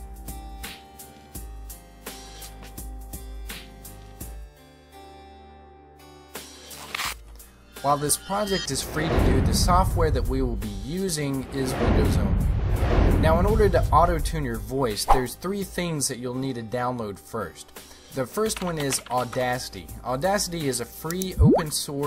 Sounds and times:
Music: 0.0s - 22.0s
Speech: 7.8s - 12.4s, 13.2s - 22.0s.

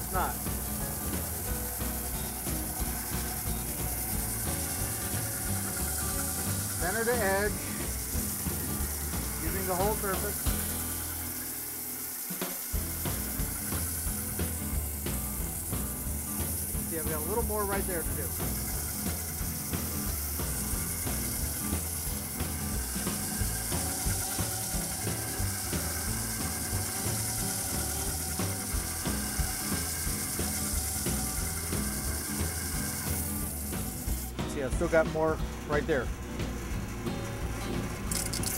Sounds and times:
Speech: 0.0s - 0.4s, 6.8s - 7.6s, 9.4s - 10.4s, 16.9s - 18.4s, 34.4s - 36.1s
Drum: 0.0s - 38.5s
Drum kit: 0.0s - 38.5s.

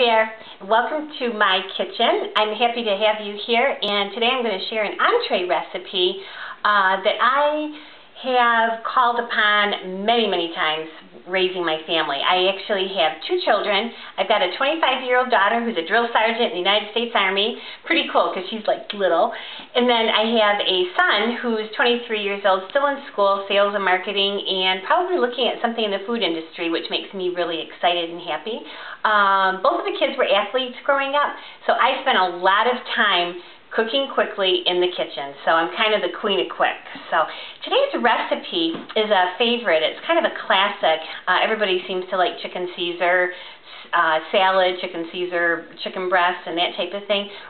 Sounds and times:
Speech: 0.0s - 47.5s.

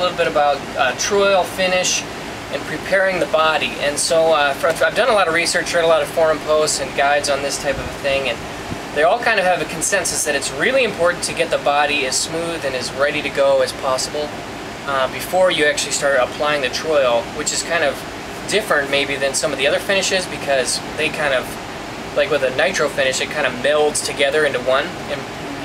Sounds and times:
Speech: 0.0s - 8.4s, 9.0s - 25.6s.

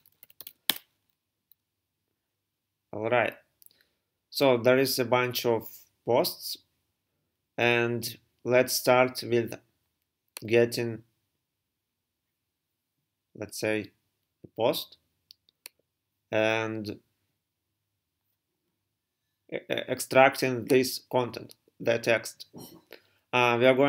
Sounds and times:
Speech: 2.9s - 3.5s, 4.3s - 6.7s, 7.6s - 9.7s, 10.4s - 11.1s, 13.4s - 15.0s, 16.3s - 17.0s, 19.5s - 22.8s, 23.4s - 23.8s.

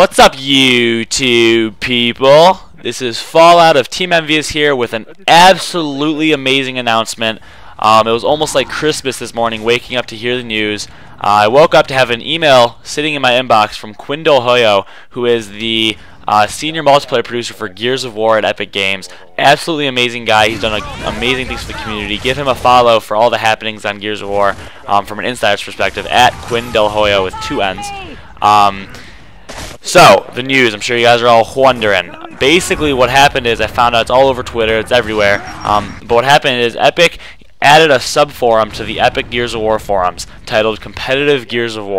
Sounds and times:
Speech: 0.0s - 29.0s, 29.8s - 41.9s.

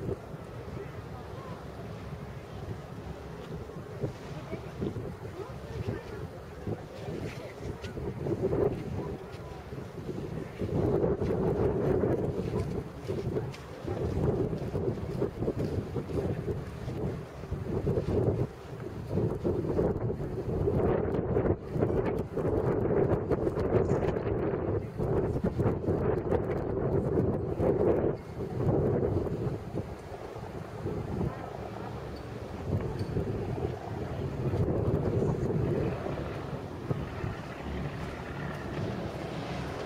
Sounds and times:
Wind noise (microphone): 0.0s - 1.5s, 2.6s - 39.8s.

